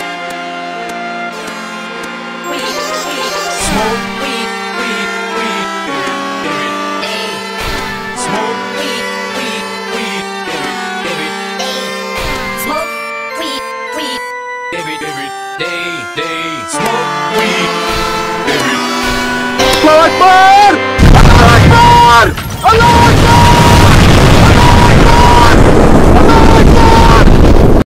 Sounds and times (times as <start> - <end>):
Music: 0.0 - 27.8.